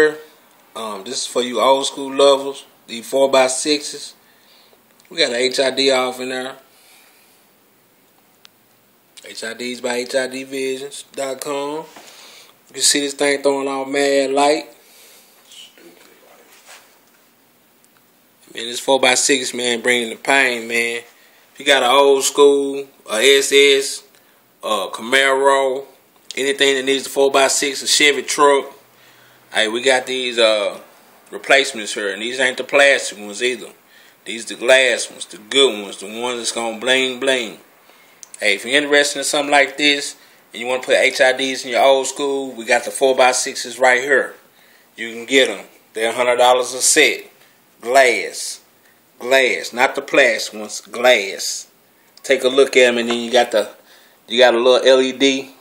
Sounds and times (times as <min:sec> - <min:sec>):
Speech: 0:00.0 - 0:04.2, 0:05.1 - 0:06.7, 0:09.2 - 0:11.9, 0:12.7 - 0:14.8, 0:15.4 - 0:16.7, 0:18.5 - 0:28.8, 0:29.5 - 0:37.7, 0:38.3 - 0:55.6.